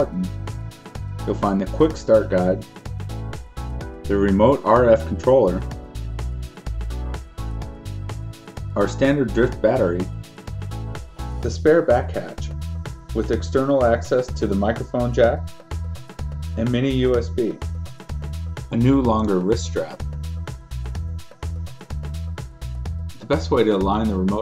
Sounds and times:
Speech: 0:00.0 - 0:00.4, 0:01.3 - 0:02.7, 0:04.1 - 0:05.7, 0:08.8 - 0:10.1, 0:11.4 - 0:12.5, 0:13.2 - 0:15.4, 0:16.6 - 0:17.6, 0:18.7 - 0:20.0, 0:23.2 - 0:24.4
Music: 0:00.0 - 0:24.4.

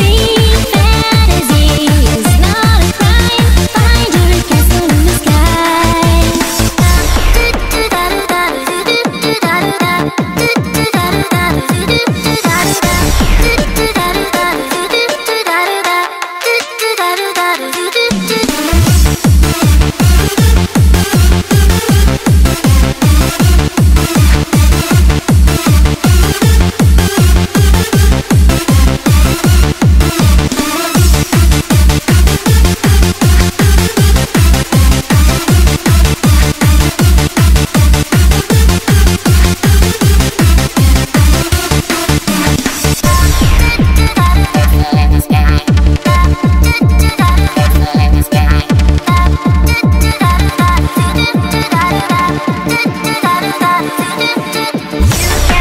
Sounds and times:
Soundtrack music: 0:00.0 - 0:15.5, 0:18.1 - 0:55.6
Techno: 0:00.0 - 0:55.6
Trance music: 0:00.0 - 0:55.6.

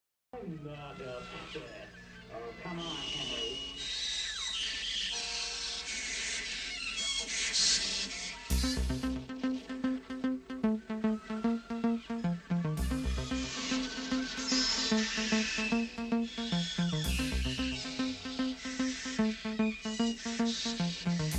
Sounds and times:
Speech: 0:00.3 - 0:03.7
Music: 0:08.5 - 0:21.3.

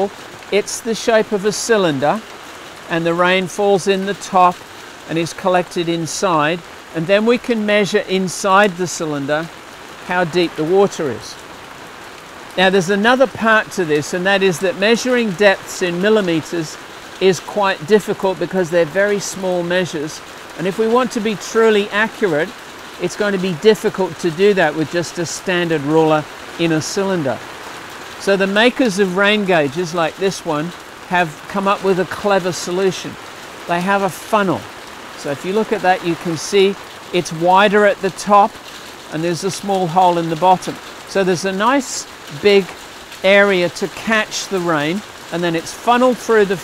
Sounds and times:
Speech: 0:00.0 - 0:02.2, 0:02.9 - 0:09.5, 0:10.1 - 0:11.4, 0:12.6 - 0:27.4, 0:28.2 - 0:46.6
Raindrop: 0:00.0 - 0:46.6.

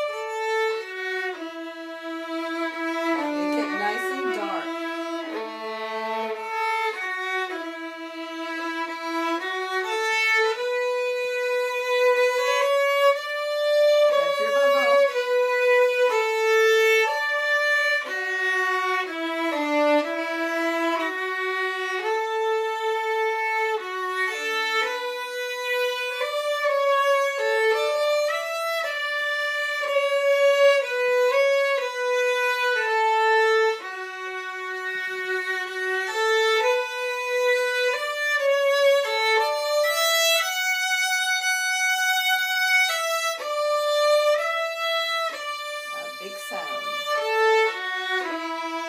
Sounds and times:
Violin, fiddle: 0:00.0 - 0:48.8.

